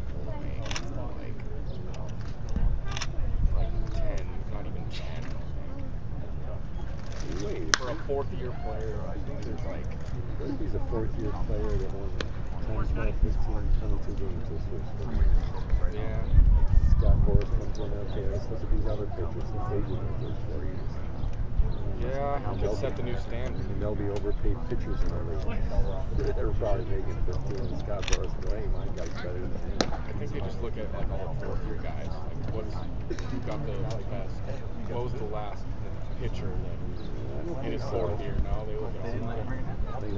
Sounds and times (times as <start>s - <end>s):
Speech: 0.0s - 21.0s, 21.8s - 40.1s.